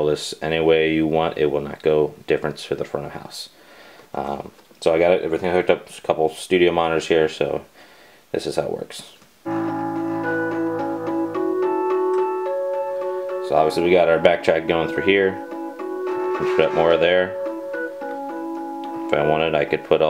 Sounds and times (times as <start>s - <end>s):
Electronic music: 9.5s - 20.1s.